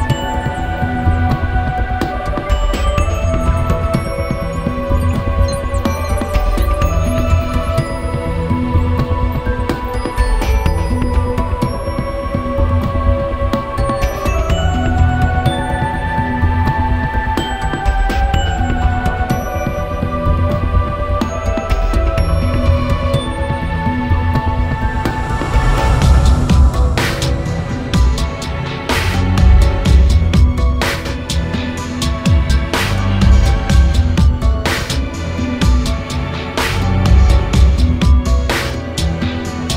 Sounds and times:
Music: 0:00.0 - 0:39.7.

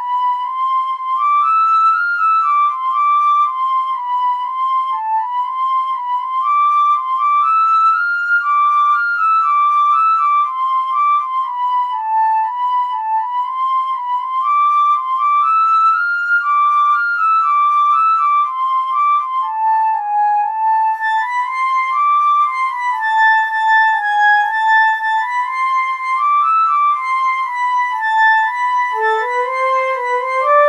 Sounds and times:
Flute: 0:00.0 - 0:30.6.

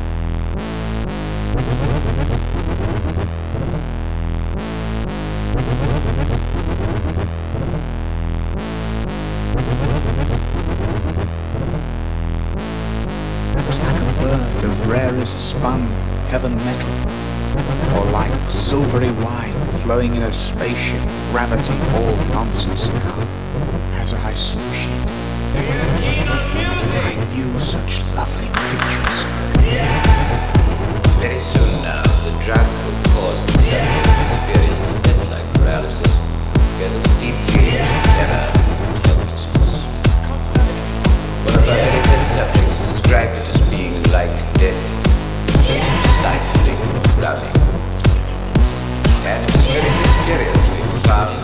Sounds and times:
Music: 0:00.0 - 0:51.4.

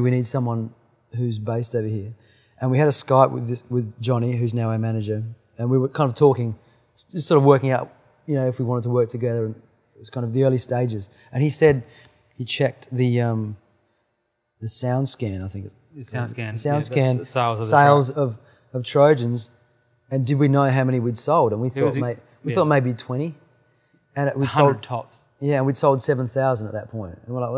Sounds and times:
Speech: 0:00.0 - 0:11.8, 0:12.4 - 0:13.6, 0:14.6 - 0:19.5, 0:20.1 - 0:23.4, 0:24.2 - 0:27.5.

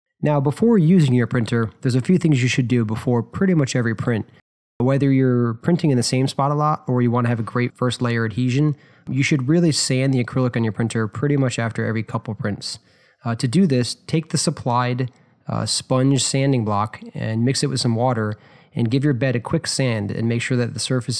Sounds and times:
Speech: 0:00.2 - 0:21.1.

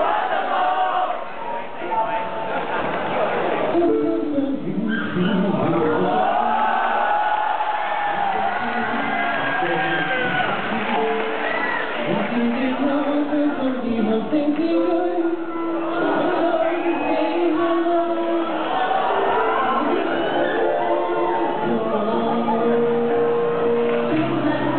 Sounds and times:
Independent music: 0:03.7 - 0:24.7.

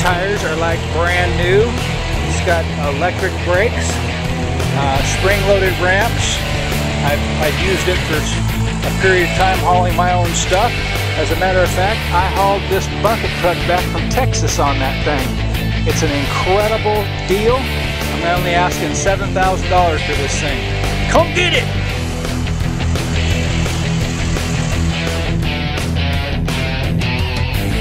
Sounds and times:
Speech: 0:00.0 - 0:04.0, 0:04.8 - 0:06.4, 0:07.0 - 0:15.3, 0:15.9 - 0:21.7
Music: 0:00.0 - 0:27.8.

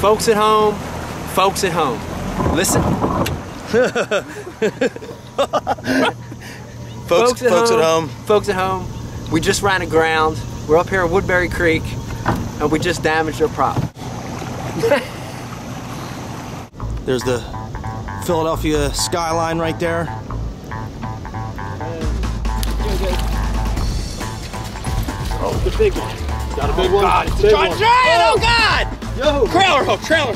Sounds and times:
Outside, rural or natural: 0:00.0 - 0:30.3
Music: 0:16.8 - 0:30.3.

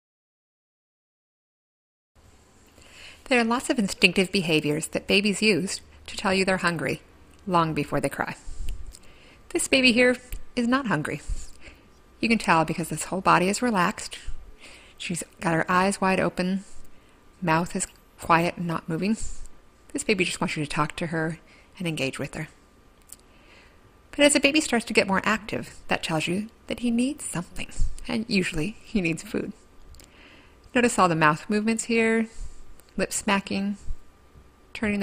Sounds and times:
Speech: 0:03.2 - 0:08.5, 0:09.5 - 0:11.5, 0:12.2 - 0:14.4, 0:15.0 - 0:16.8, 0:17.4 - 0:22.6, 0:24.1 - 0:29.6, 0:30.7 - 0:32.4, 0:33.0 - 0:33.9, 0:34.8 - 0:35.0.

